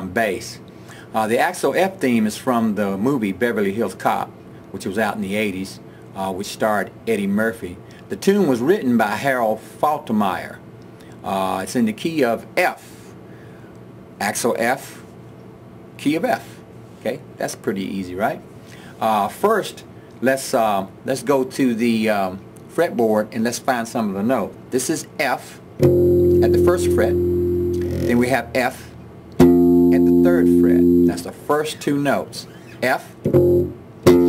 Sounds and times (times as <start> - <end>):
Speech: 0.0 - 10.6, 11.2 - 13.1, 14.2 - 15.1, 16.0 - 25.6, 26.4 - 27.2, 28.0 - 29.0, 29.9 - 33.2.